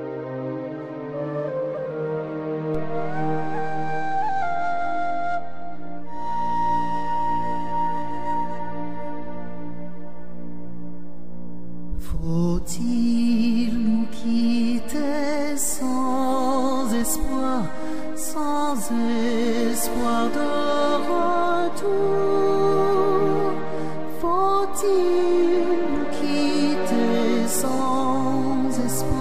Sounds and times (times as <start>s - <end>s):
Music: 0.0s - 29.2s.